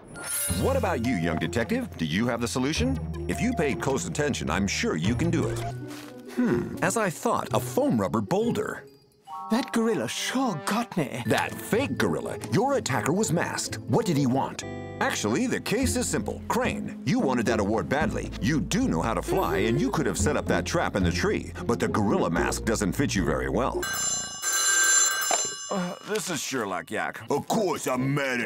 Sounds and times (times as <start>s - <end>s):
Music: 0.0s - 24.1s
Speech: 0.6s - 5.7s, 6.8s - 8.8s, 9.5s - 23.8s, 25.7s - 28.4s.